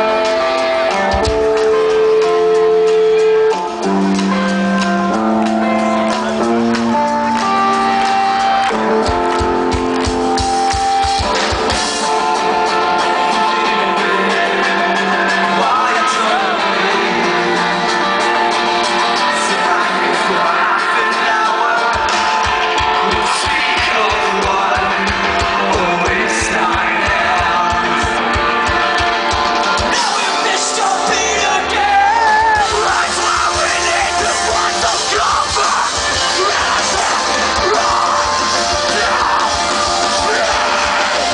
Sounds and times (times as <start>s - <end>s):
Music: 0.0s - 41.3s.